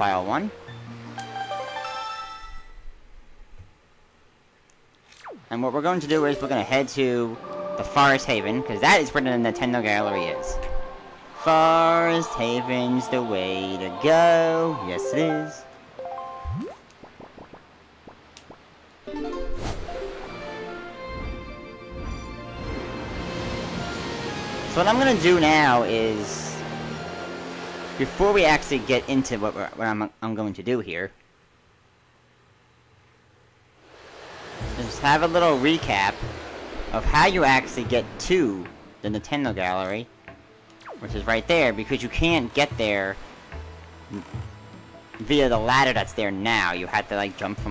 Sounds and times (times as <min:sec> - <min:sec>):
Speech: 0:00.0 - 0:00.5, 0:05.5 - 0:10.6, 0:11.4 - 0:15.6, 0:24.8 - 0:26.6, 0:28.0 - 0:31.2, 0:34.8 - 0:36.2, 0:37.0 - 0:40.1, 0:41.0 - 0:43.2, 0:45.2 - 0:47.7
Music: 0:00.0 - 0:02.9, 0:05.8 - 0:16.7, 0:19.1 - 0:29.0, 0:39.0 - 0:47.7.